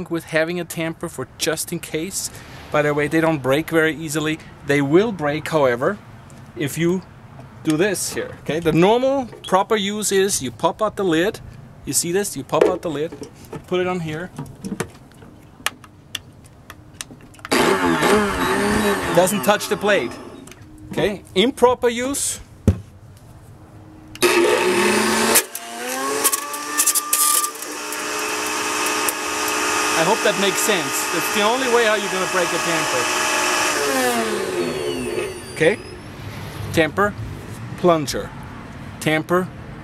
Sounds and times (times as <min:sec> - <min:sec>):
Speech: 0:00.0 - 0:06.0, 0:06.6 - 0:07.1, 0:07.7 - 0:14.4, 0:19.1 - 0:20.2, 0:20.9 - 0:22.4, 0:30.0 - 0:33.2, 0:35.6 - 0:35.8, 0:36.8 - 0:37.2, 0:37.8 - 0:38.3, 0:39.0 - 0:39.5.